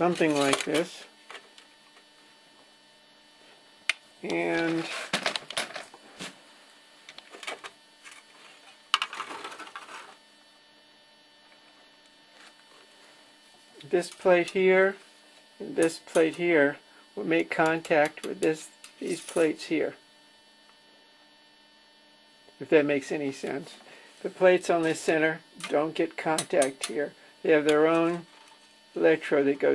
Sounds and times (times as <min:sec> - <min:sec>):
Speech: 0:00.0 - 0:01.1, 0:04.2 - 0:05.0, 0:13.8 - 0:15.0, 0:15.6 - 0:20.0, 0:22.6 - 0:28.3, 0:29.0 - 0:29.7.